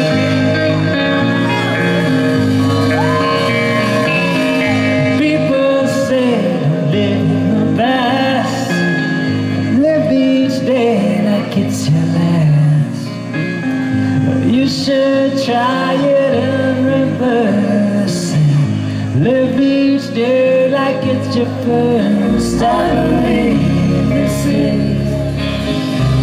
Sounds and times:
Acoustic guitar: 0.0s - 26.2s.

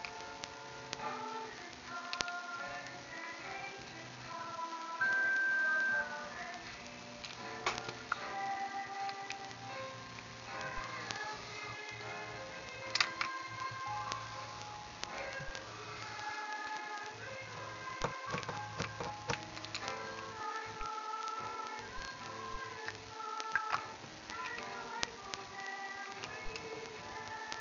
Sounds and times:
Inside, small room: 0.0s - 27.6s
Music: 0.0s - 27.6s.

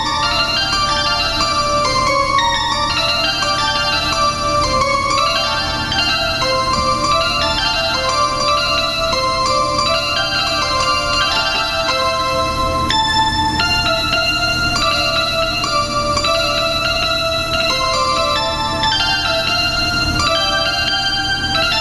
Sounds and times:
Harpsichord: 0.0s - 21.8s.

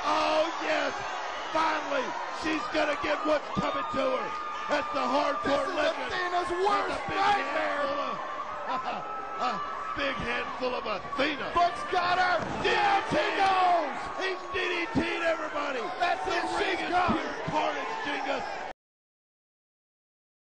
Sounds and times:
Speech: 0.0s - 18.5s.

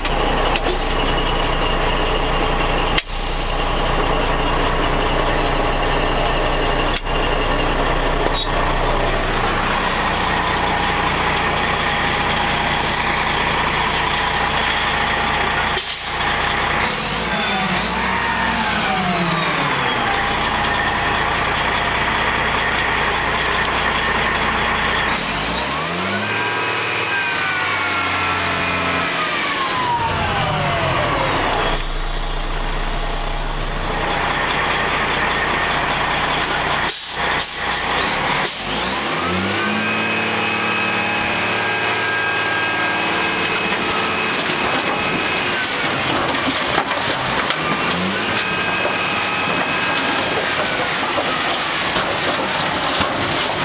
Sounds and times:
Truck: 0.0s - 53.6s.

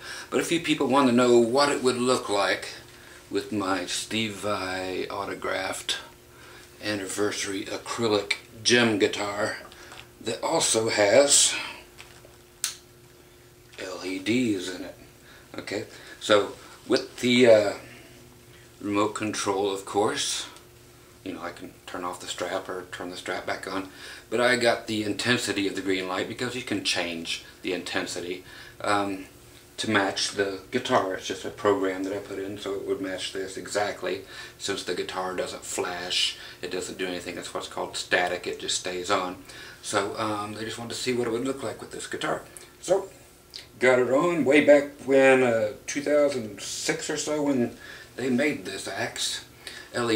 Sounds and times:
Speech: 0.0s - 6.2s, 6.8s - 11.9s, 13.8s - 18.2s, 18.8s - 20.6s, 21.2s - 50.1s.

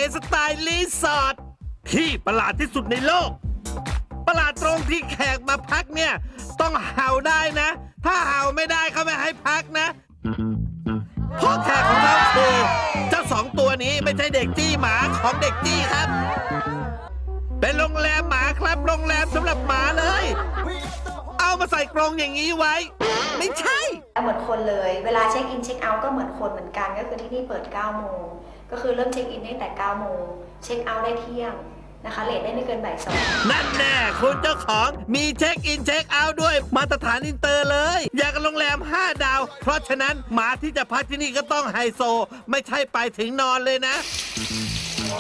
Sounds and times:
Music: 0.0s - 24.5s, 33.1s - 41.5s, 44.0s - 45.2s
Speech: 21.4s - 44.0s.

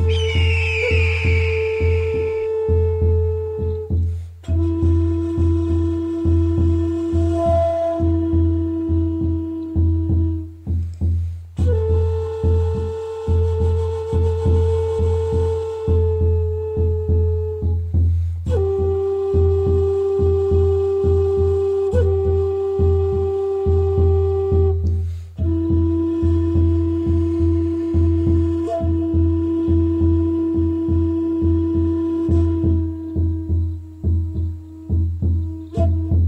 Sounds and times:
Traditional music: 0.0s - 36.2s.

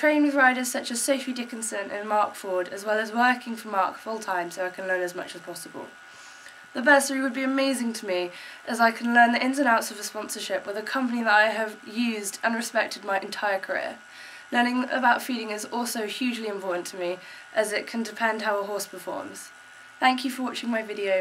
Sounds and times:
Speech: 0.0s - 6.0s, 6.8s - 14.0s, 14.6s - 19.5s, 20.1s - 21.2s.

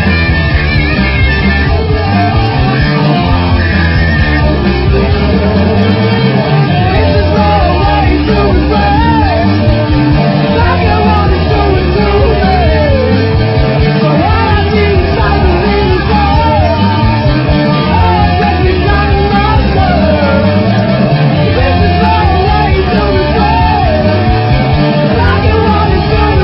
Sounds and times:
Rock and roll: 0.0s - 26.4s.

